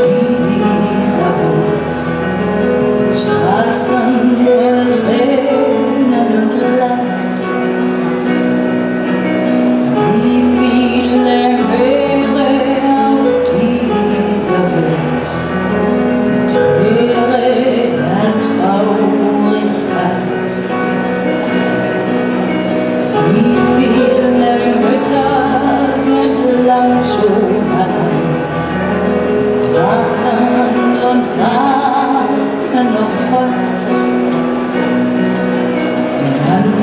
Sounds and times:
Music: 0.0s - 36.8s.

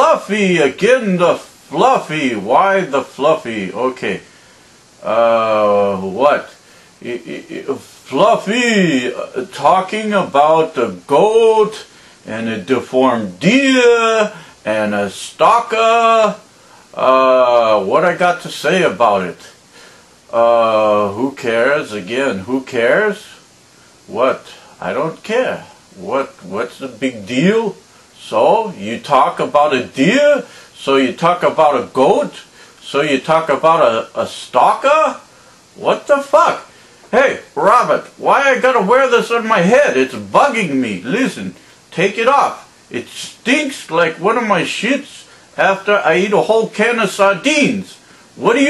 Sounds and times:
Speech: 0.0s - 4.3s, 5.0s - 19.6s, 20.3s - 23.5s, 24.1s - 48.6s.

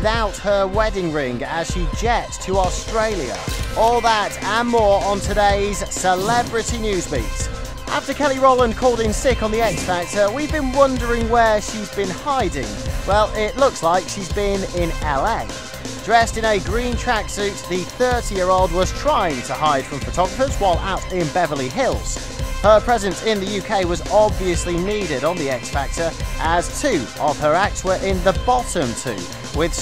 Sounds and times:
Music: 0.0s - 29.8s
Speech: 0.0s - 29.8s.

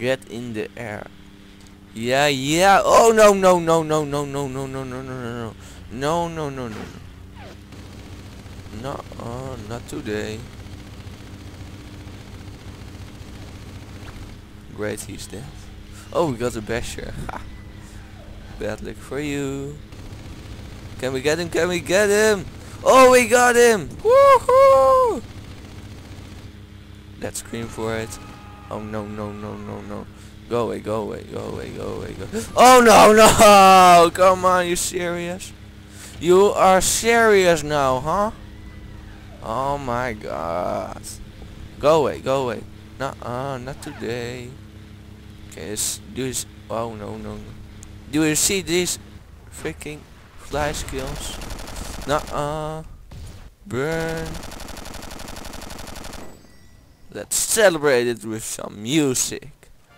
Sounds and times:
Fusillade: 7.4s - 14.4s, 19.9s - 23.3s, 25.2s - 26.6s, 27.5s - 28.6s, 50.5s - 56.4s.

